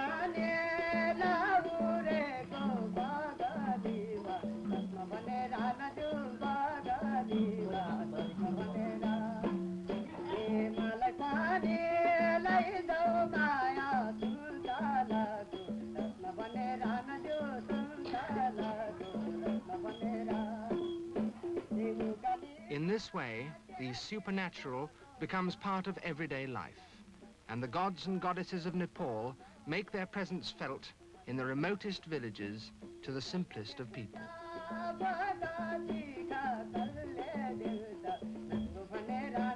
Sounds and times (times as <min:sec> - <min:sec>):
Music: 0:00.0 - 0:39.5.